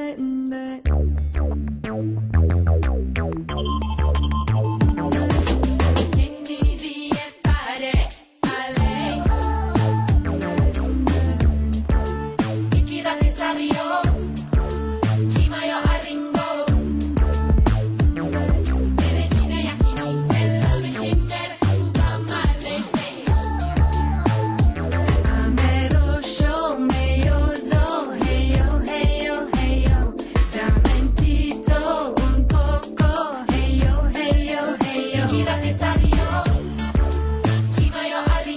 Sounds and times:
Soundtrack music: 0:02.4 - 0:06.2, 0:16.6 - 0:21.0, 0:22.6 - 0:26.7, 0:35.0 - 0:37.7.

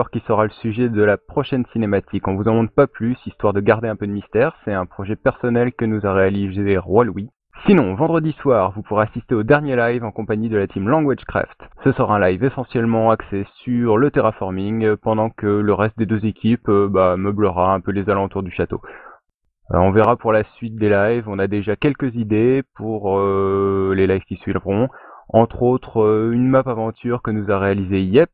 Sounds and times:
Speech: 0:00.0 - 0:28.3.

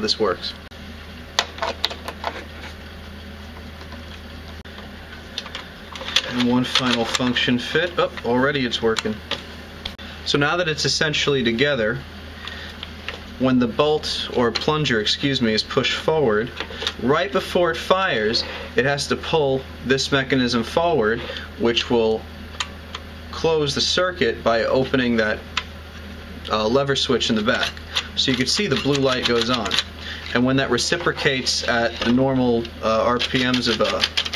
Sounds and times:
Speech: 0:00.0 - 0:00.6, 0:06.2 - 0:09.2, 0:10.3 - 0:12.1, 0:13.4 - 0:22.3, 0:23.3 - 0:25.4, 0:26.5 - 0:34.1
Inside, small room: 0:00.0 - 0:34.3.

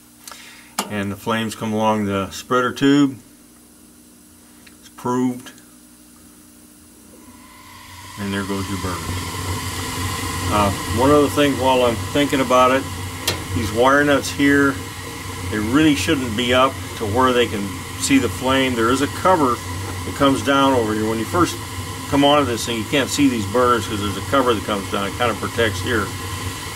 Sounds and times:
Speech: 0:00.8 - 0:03.2, 0:04.8 - 0:05.6, 0:08.2 - 0:09.1, 0:10.5 - 0:12.9, 0:13.5 - 0:14.8, 0:15.5 - 0:26.2.

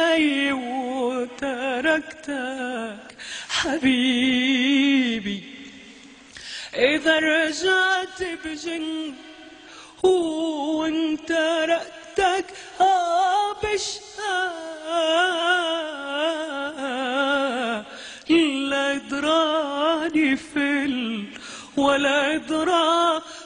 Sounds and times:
Female singing: 0:00.0 - 0:05.5, 0:06.8 - 0:09.4, 0:10.0 - 0:23.4.

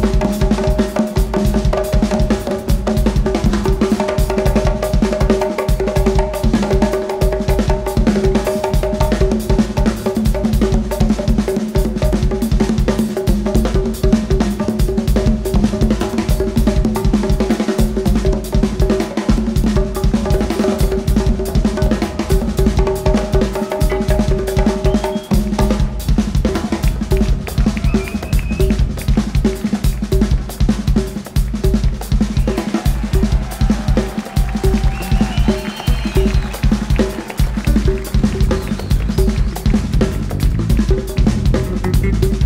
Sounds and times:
Inside, public space: 0:00.0 - 0:42.4.

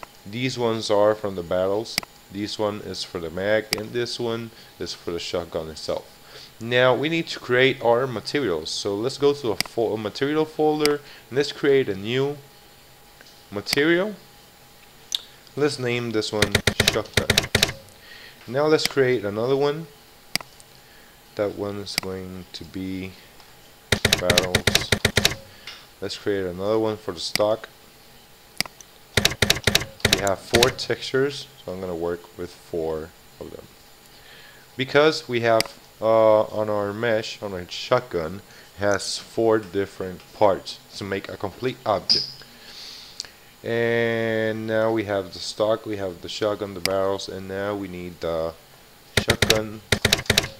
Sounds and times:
Speech: 0:00.3 - 0:12.5, 0:13.5 - 0:14.3, 0:15.6 - 0:17.4, 0:18.5 - 0:20.0, 0:21.4 - 0:23.2, 0:24.1 - 0:24.9, 0:26.0 - 0:27.7, 0:30.2 - 0:33.7, 0:34.8 - 0:42.3, 0:43.6 - 0:48.6, 0:49.2 - 0:49.8.

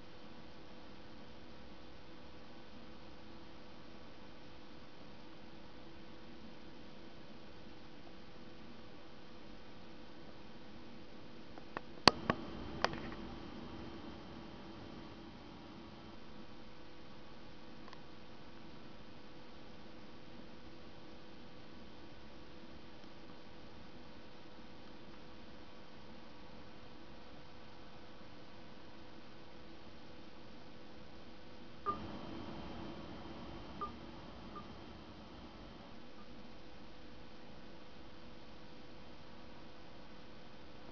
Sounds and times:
Inside, small room: 0:00.0 - 0:40.9
Silence: 0:12.0 - 0:17.4, 0:31.9 - 0:37.8.

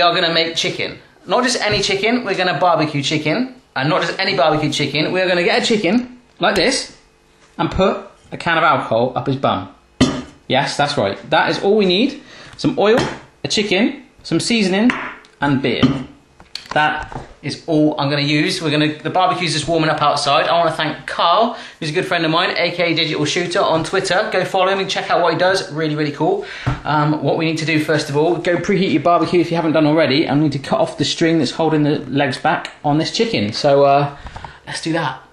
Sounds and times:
Speech: 0:00.0 - 0:07.0, 0:07.6 - 0:09.8, 0:10.5 - 0:35.3.

